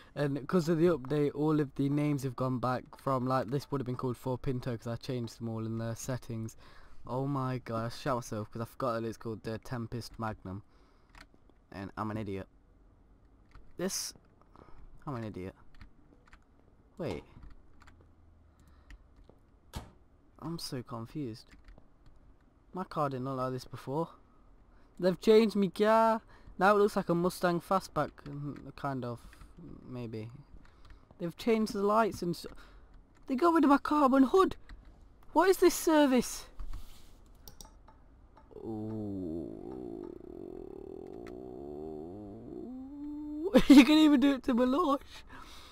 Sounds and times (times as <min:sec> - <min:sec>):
Speech: 0:00.2 - 0:10.6, 0:11.7 - 0:12.5, 0:13.8 - 0:14.2, 0:15.0 - 0:15.6, 0:17.0 - 0:17.4, 0:20.4 - 0:21.5, 0:22.8 - 0:24.2, 0:25.0 - 0:30.5, 0:31.2 - 0:32.6, 0:33.3 - 0:34.6, 0:35.3 - 0:36.5, 0:38.5 - 0:45.1.